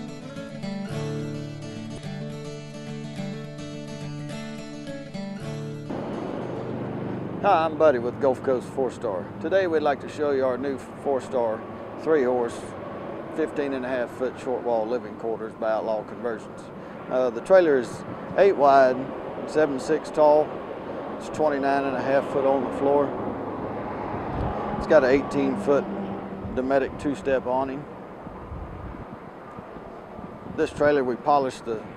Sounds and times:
Music: 0.0 - 6.7
Speech: 7.4 - 12.7, 13.4 - 20.5, 21.2 - 23.1, 24.8 - 25.9, 26.6 - 27.9, 30.6 - 31.9.

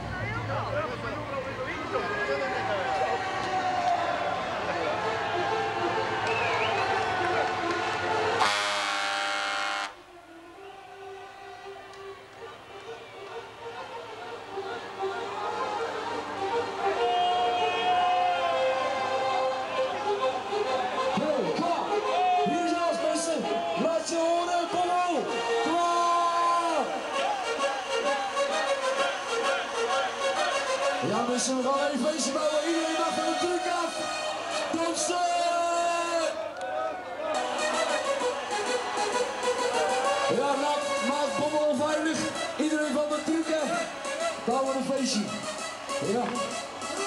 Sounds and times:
Music: 0.0 - 47.0
Speech: 31.0 - 34.0, 34.8 - 36.4, 44.5 - 45.3.

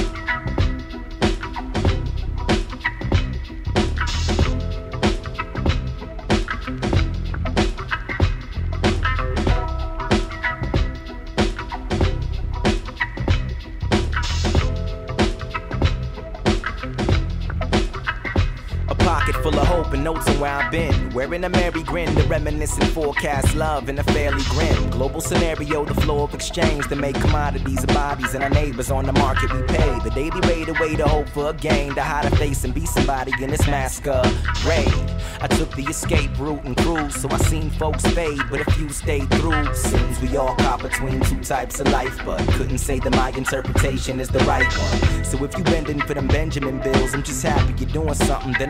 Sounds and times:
Music: 0.0 - 48.7.

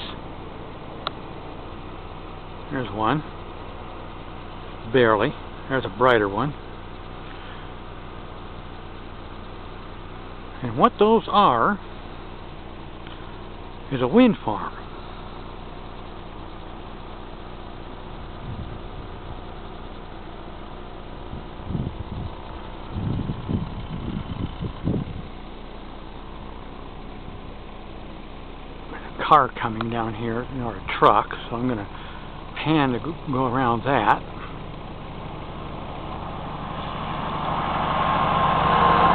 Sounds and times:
Speech: 2.7 - 3.3, 4.8 - 6.6, 10.6 - 11.8, 13.9 - 14.8, 29.0 - 31.9, 32.5 - 34.3.

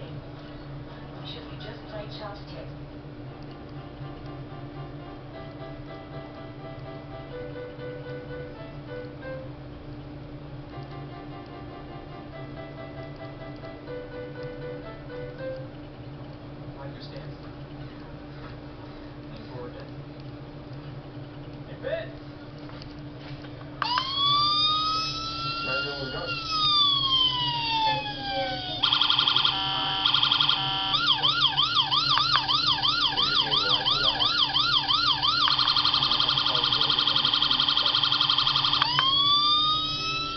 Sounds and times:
Inside, small room: 0.0 - 40.3
Police car (siren): 23.8 - 40.3.

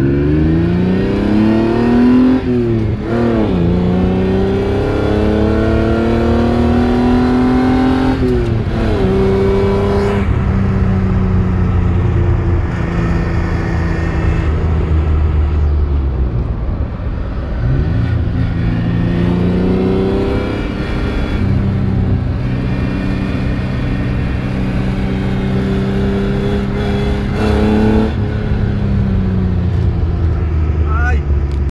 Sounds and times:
Car: 0.0 - 31.7
Speech: 30.8 - 31.3.

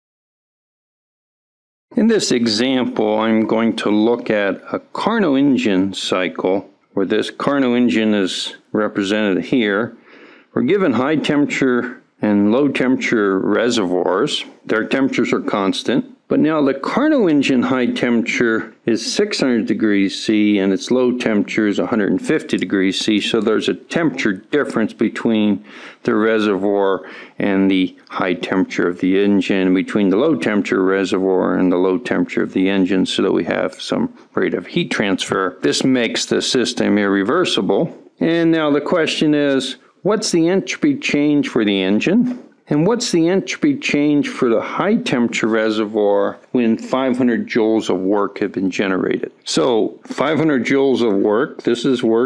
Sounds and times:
Speech: 1.9 - 52.2.

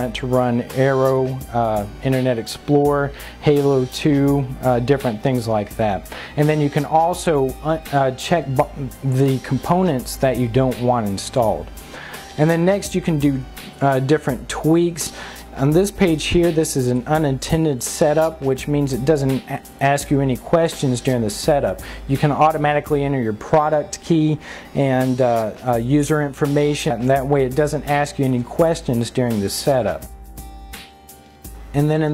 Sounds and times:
Speech: 0.0 - 11.7, 12.4 - 30.1, 31.7 - 32.1.

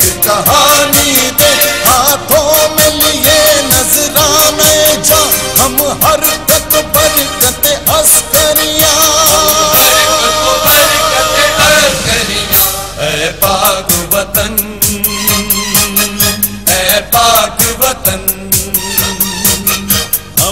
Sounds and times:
Music of Bollywood: 0.0 - 20.5.

